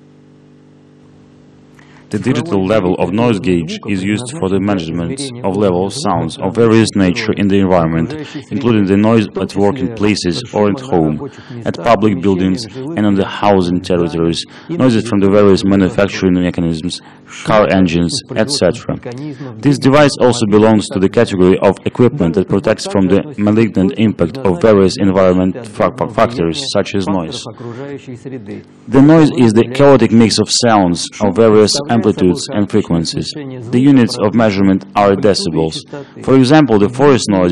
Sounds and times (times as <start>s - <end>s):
Speech: 2.1s - 37.5s.